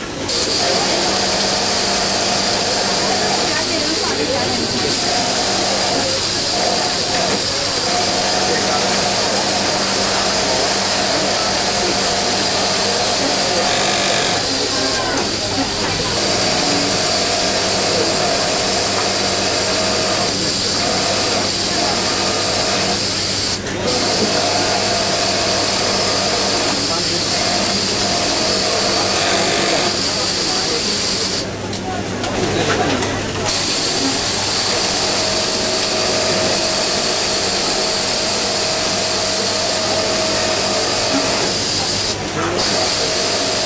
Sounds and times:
Sewing machine: 0.0 - 31.6, 32.5 - 43.6
Speech: 0.0 - 43.6.

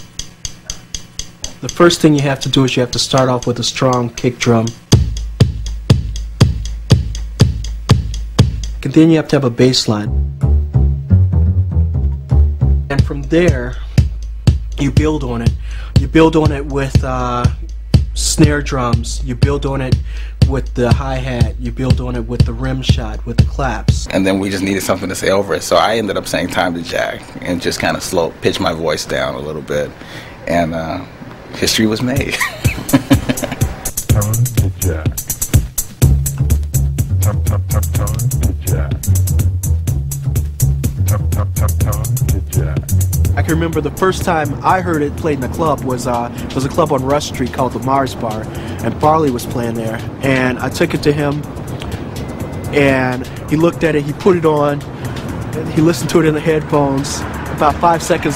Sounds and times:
Music: 0.0 - 30.9, 31.6 - 58.3
Speech: 1.6 - 4.8, 8.8 - 10.1, 12.9 - 13.8, 14.8 - 17.6, 18.2 - 32.4, 34.1 - 35.2, 37.2 - 39.0, 41.1 - 51.5, 52.7 - 54.9, 55.5 - 58.3.

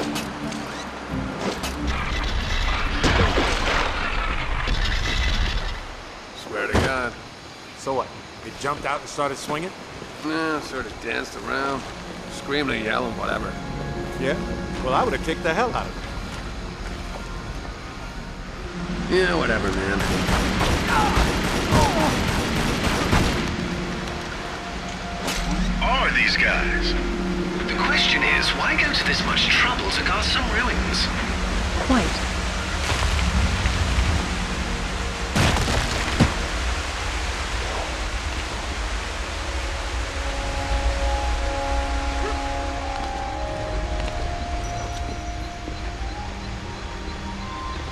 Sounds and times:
Music: 0.0 - 3.7, 10.3 - 47.9.

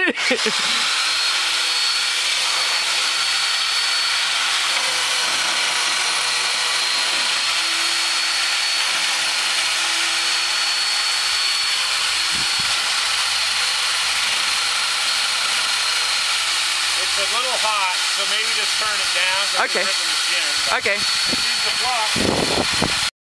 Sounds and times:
Speech: 17.0 - 22.2.

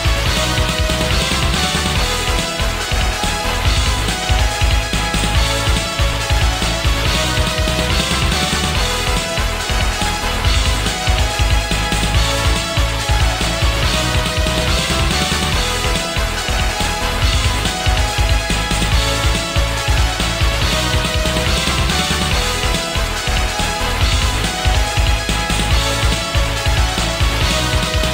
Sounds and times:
Music: 0.0 - 28.1.

